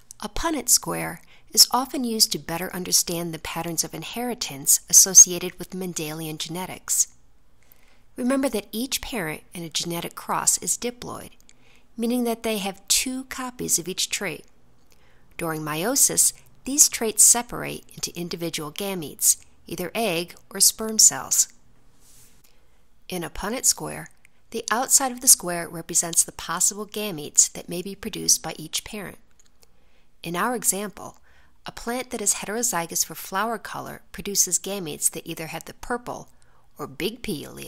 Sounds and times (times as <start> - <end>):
Narration, monologue: 0.0 - 37.6.